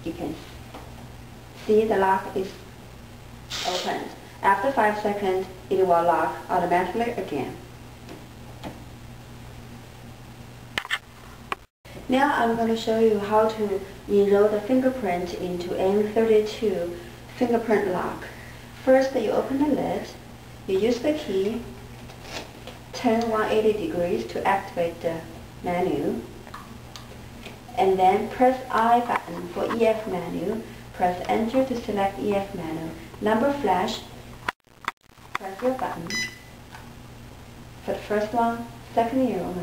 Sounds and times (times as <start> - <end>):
Speech: 0.0 - 0.5, 1.6 - 2.6, 3.5 - 7.7, 12.0 - 21.8, 23.0 - 26.3, 27.7 - 34.2, 35.4 - 36.2, 37.8 - 39.6.